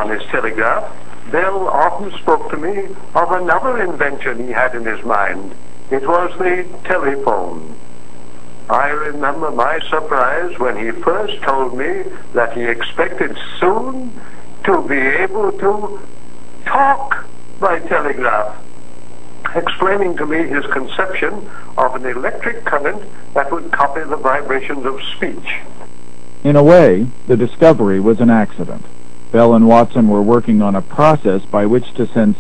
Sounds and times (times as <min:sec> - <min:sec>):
Speech: 0:00.0 - 0:07.8, 0:08.7 - 0:16.1, 0:16.7 - 0:18.6, 0:19.5 - 0:25.7, 0:26.4 - 0:32.4.